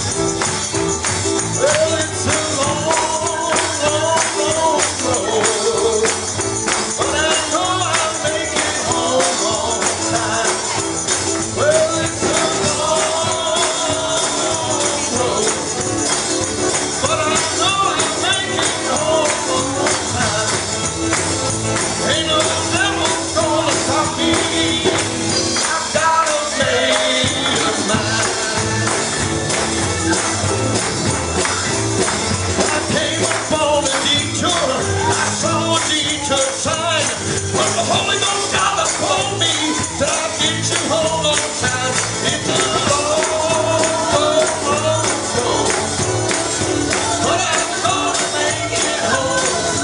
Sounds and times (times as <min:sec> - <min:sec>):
Music: 0:00.0 - 0:49.8
Male singing: 0:01.6 - 0:16.2, 0:16.9 - 0:20.9, 0:21.9 - 0:29.1, 0:32.6 - 0:46.3, 0:46.9 - 0:49.8.